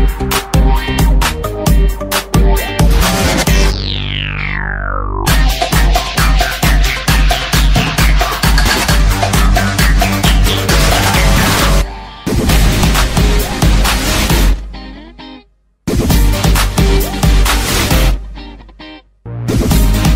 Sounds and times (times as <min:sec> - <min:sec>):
Soundtrack music: 0:00.0 - 0:15.3.